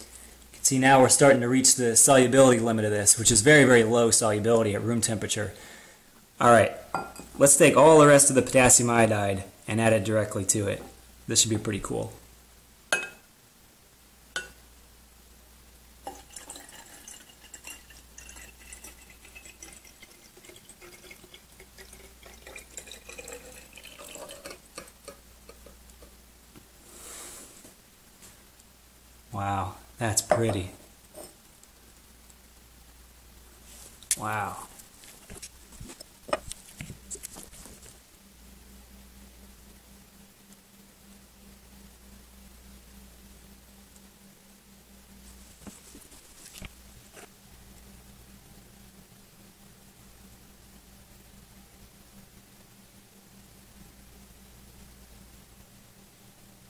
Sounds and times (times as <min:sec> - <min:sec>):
Water tap, faucet: 0:16.1 - 0:24.9
Water: 0:16.1 - 0:25.8.